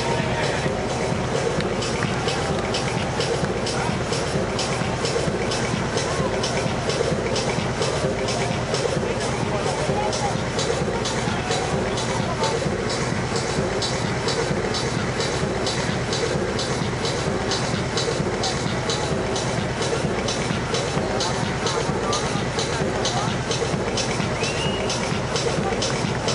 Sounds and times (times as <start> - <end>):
Speech: 0.0 - 15.7, 17.8 - 26.3
Hubbub, speech noise, speech babble: 0.0 - 26.3
Music: 0.0 - 26.3.